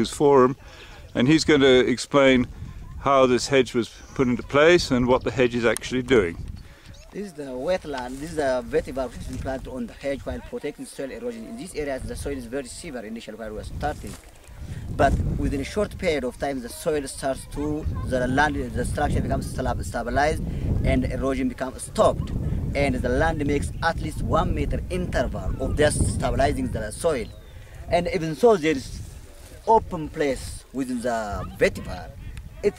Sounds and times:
Speech: 0:07.1 - 0:14.2, 0:15.0 - 0:27.3, 0:27.9 - 0:32.7.

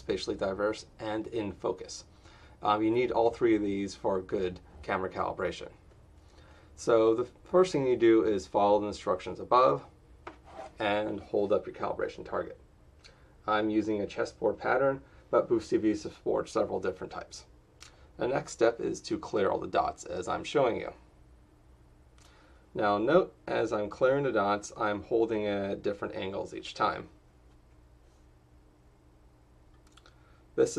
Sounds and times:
Speech: 0:00.0 - 0:05.8, 0:06.8 - 0:09.9, 0:10.8 - 0:12.6, 0:13.4 - 0:17.5, 0:18.2 - 0:21.1, 0:22.8 - 0:27.2.

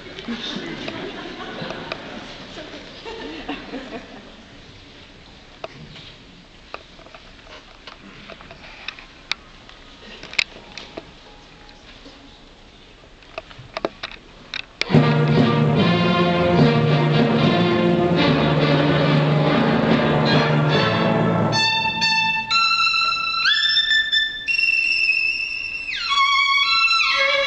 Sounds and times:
Violin, fiddle: 0:17.5 - 0:27.4.

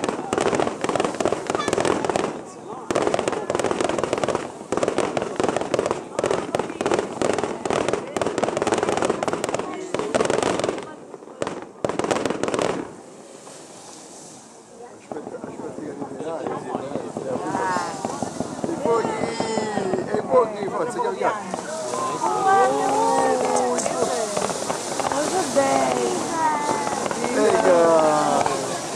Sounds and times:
Firecracker: 0:00.0 - 0:28.9.

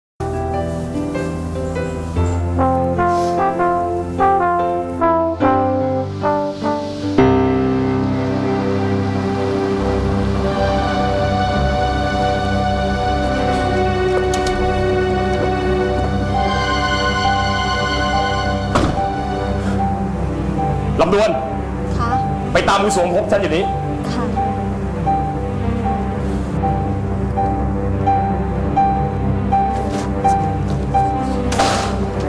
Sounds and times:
Brass instrument: 0:02.2 - 0:32.2.

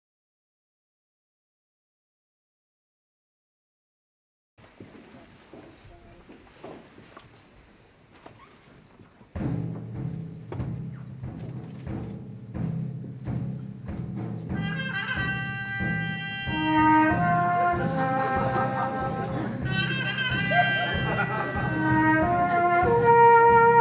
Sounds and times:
Orchestra: 0:09.4 - 0:23.8
Timpani: 0:09.4 - 0:23.8
Classical music: 0:14.0 - 0:23.8
Brass instrument: 0:14.5 - 0:23.8.

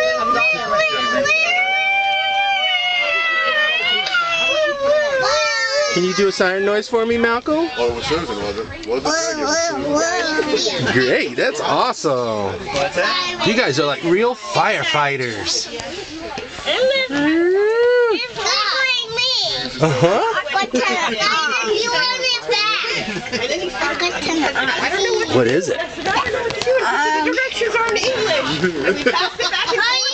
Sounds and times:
Child speech, kid speaking: 0:00.0 - 0:01.5, 0:03.8 - 0:06.4, 0:09.0 - 0:11.2, 0:12.6 - 0:13.6, 0:18.1 - 0:19.8, 0:20.4 - 0:25.4, 0:26.1 - 0:28.4, 0:29.6 - 0:30.1.

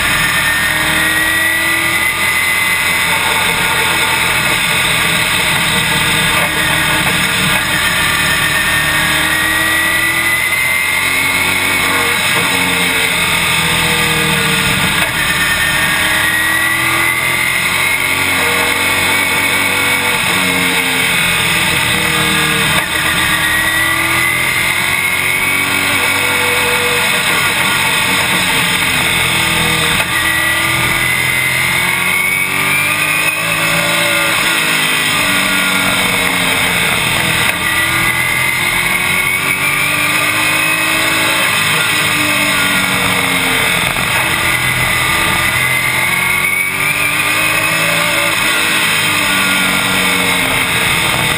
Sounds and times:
Car: 0:00.0 - 0:51.3.

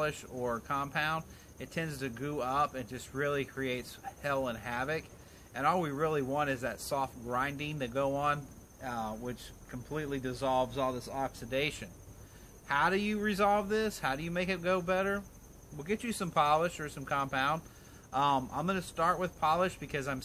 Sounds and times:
Speech: 0:00.0 - 0:11.9, 0:12.7 - 0:20.2.

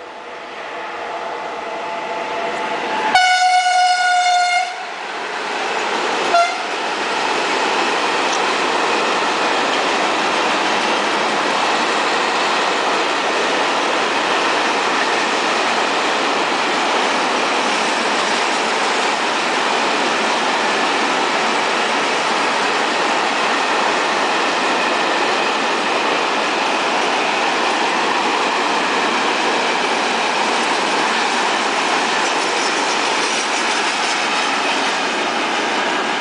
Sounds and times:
Railroad car, train wagon: 0:00.0 - 0:36.2
Train: 0:00.0 - 0:36.2.

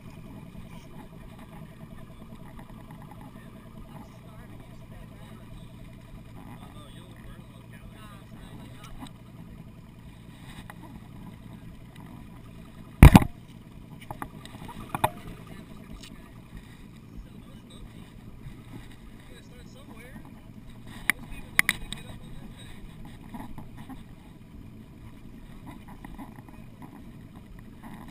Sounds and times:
Speech: 0:03.2 - 0:05.8, 0:06.4 - 0:09.1, 0:15.2 - 0:16.4, 0:17.1 - 0:18.2, 0:19.2 - 0:20.5, 0:21.1 - 0:22.9.

